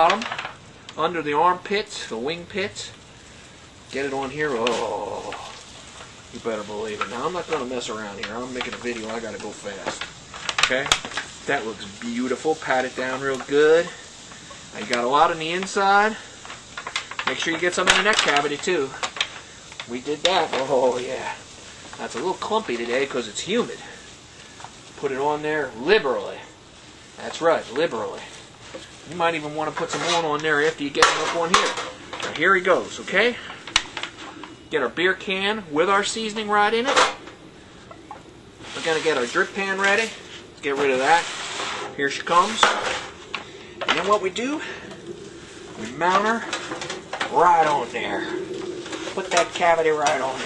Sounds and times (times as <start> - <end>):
Speech: 1.0 - 3.0, 3.9 - 5.6, 6.3 - 14.0, 14.7 - 16.2, 17.3 - 19.0, 19.9 - 21.4, 22.0 - 24.0, 25.0 - 26.5, 27.2 - 28.4, 29.1 - 33.4, 34.7 - 37.1, 38.8 - 41.3, 42.0 - 43.0, 43.9 - 44.8, 45.8 - 46.5, 47.3 - 48.4, 49.2 - 50.4.